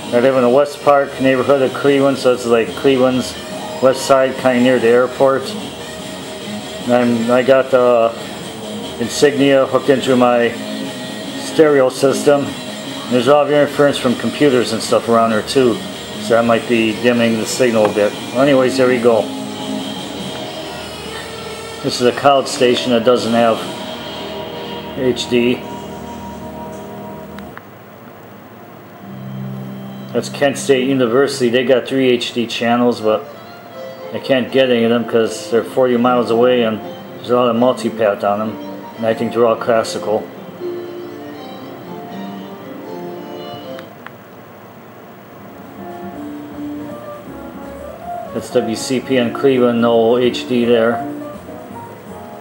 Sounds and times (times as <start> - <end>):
Music: 0.0 - 27.6, 29.0 - 44.1, 45.4 - 52.4
Speech: 0.1 - 5.6, 6.9 - 8.2, 9.0 - 10.6, 11.4 - 19.3, 21.8 - 23.7, 25.0 - 25.6, 30.2 - 33.3, 34.2 - 40.3, 48.4 - 51.1.